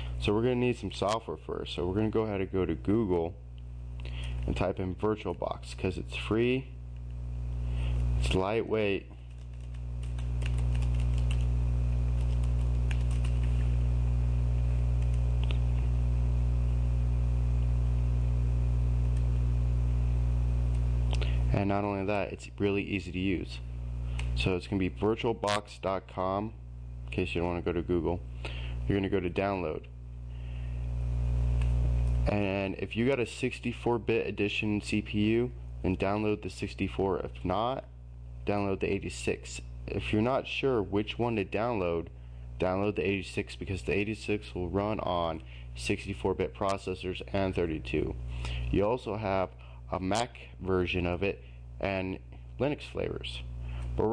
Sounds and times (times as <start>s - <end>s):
Speech: 0.2s - 3.4s, 4.5s - 6.8s, 8.2s - 9.2s, 21.5s - 23.7s, 24.4s - 28.2s, 28.9s - 29.9s, 32.3s - 54.1s.